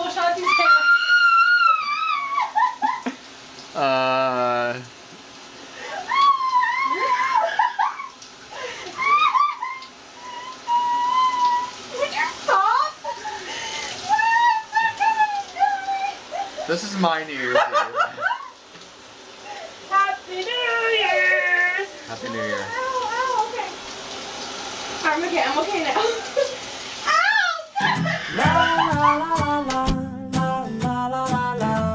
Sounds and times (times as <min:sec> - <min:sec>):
Bathtub (filling or washing): 0:00.0 - 0:29.8
Inside, small room: 0:00.0 - 0:31.9.